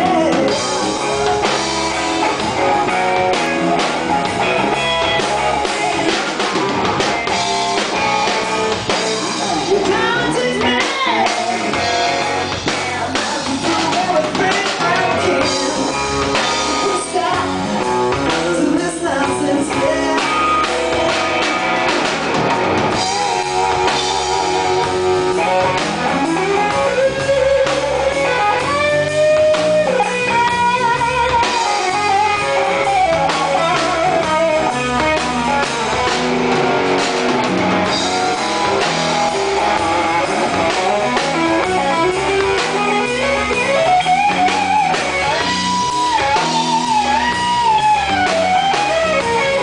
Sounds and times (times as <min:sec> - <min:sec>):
Electric guitar: 0:00.0 - 0:49.6.